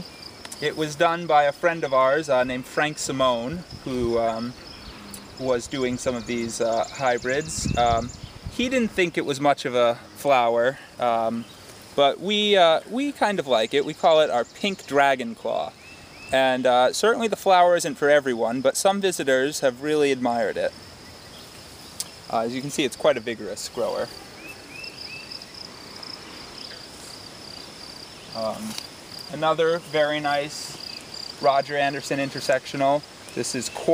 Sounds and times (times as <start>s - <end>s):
Speech: 0.6s - 4.6s, 5.4s - 20.7s, 22.3s - 24.1s, 28.4s - 30.8s, 31.4s - 33.9s.